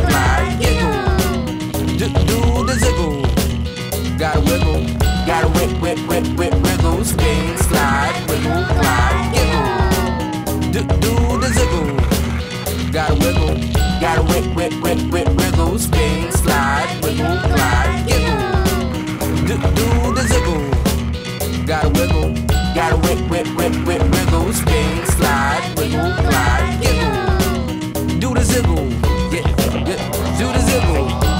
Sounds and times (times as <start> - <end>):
Music: 0.0 - 31.3.